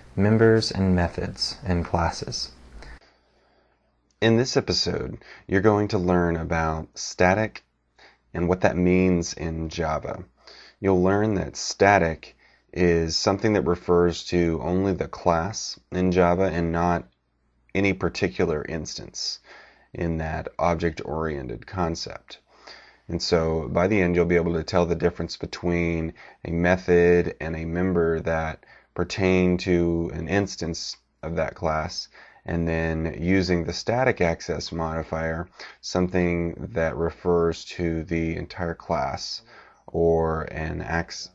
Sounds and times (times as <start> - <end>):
Speech: 0.0 - 3.0, 4.2 - 7.7, 8.3 - 17.1, 17.8 - 22.5, 23.1 - 41.3.